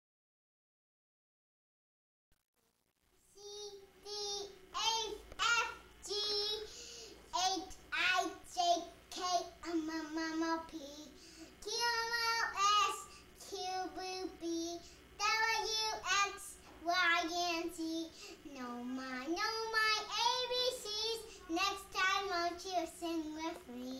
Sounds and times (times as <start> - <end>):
Inside, small room: 2.4 - 23.9.